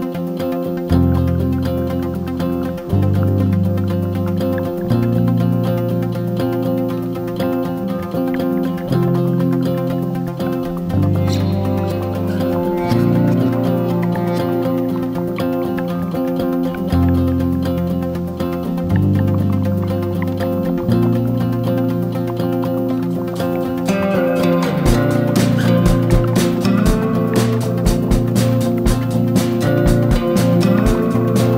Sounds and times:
Music: 0.0s - 31.5s.

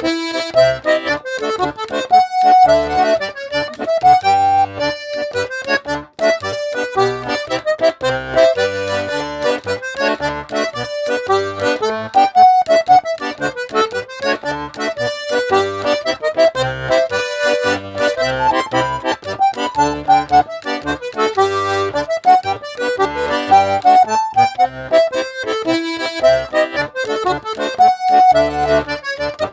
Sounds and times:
Accordion: 0.0s - 29.5s.

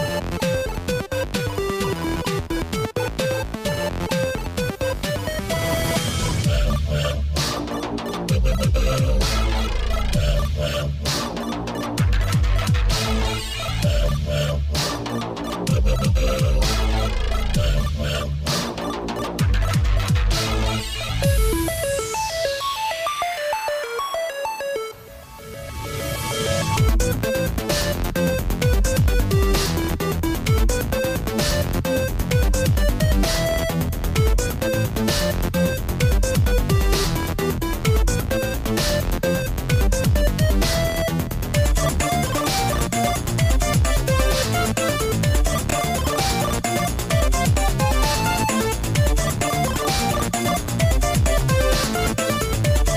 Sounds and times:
Dance music: 0.0s - 52.9s
Soundtrack music: 0.0s - 52.9s.

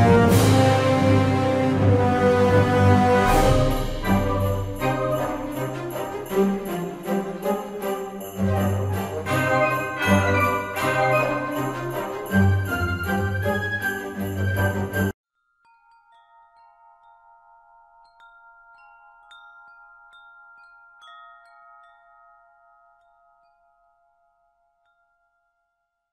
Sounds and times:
Wind chime: 3.3s - 26.1s.

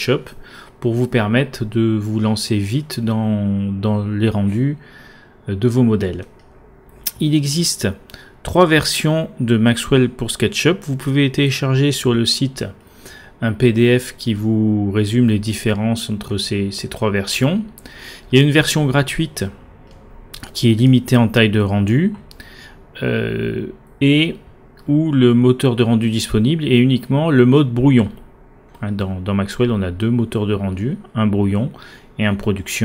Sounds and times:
Speech: 0.0s - 4.8s, 5.5s - 6.3s, 7.1s - 12.8s, 13.4s - 19.6s, 20.4s - 22.3s, 23.0s - 32.8s.

